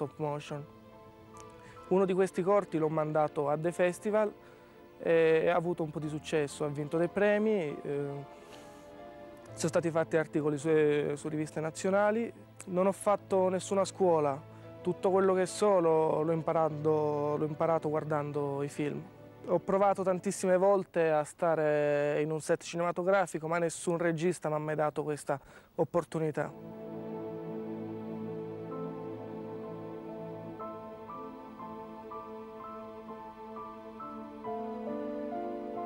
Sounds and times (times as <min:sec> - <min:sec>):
Speech: 0:00.0 - 0:00.7, 0:01.9 - 0:04.3, 0:05.0 - 0:08.2, 0:09.6 - 0:26.6
Music: 0:00.0 - 0:35.8.